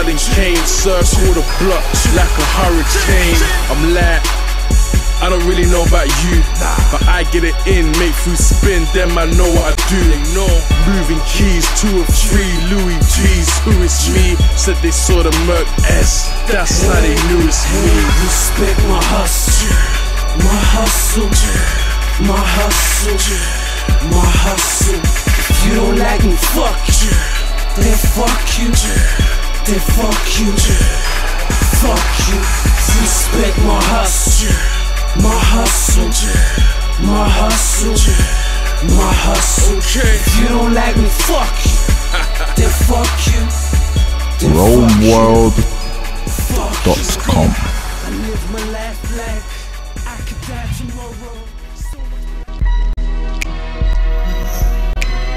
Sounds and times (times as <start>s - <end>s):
Hip hop music: 0.0s - 52.2s.